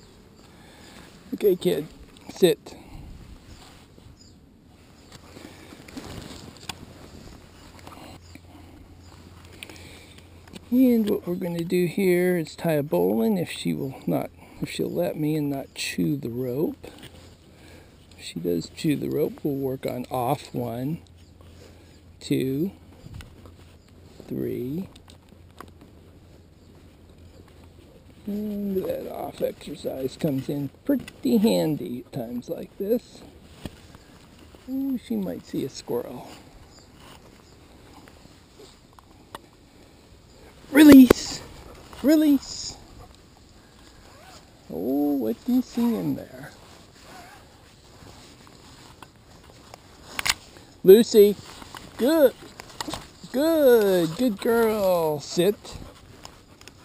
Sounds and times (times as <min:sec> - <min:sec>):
Speech: 0:01.3 - 0:02.8, 0:10.7 - 0:17.0, 0:18.2 - 0:21.0, 0:22.2 - 0:22.8, 0:24.2 - 0:25.0, 0:28.3 - 0:33.3, 0:34.7 - 0:36.4, 0:40.7 - 0:42.8, 0:44.7 - 0:46.6, 0:50.8 - 0:51.4, 0:52.0 - 0:52.4, 0:53.2 - 0:55.9.